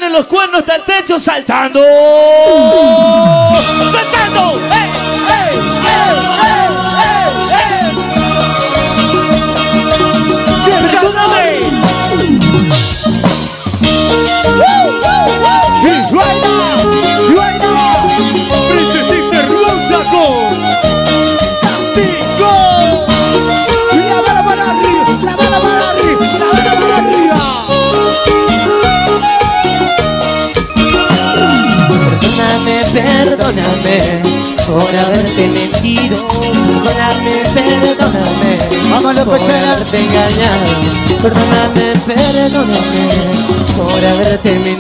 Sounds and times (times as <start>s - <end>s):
Speech: 0.0s - 3.3s, 10.7s - 11.8s, 18.7s - 20.6s
Music: 1.8s - 44.8s.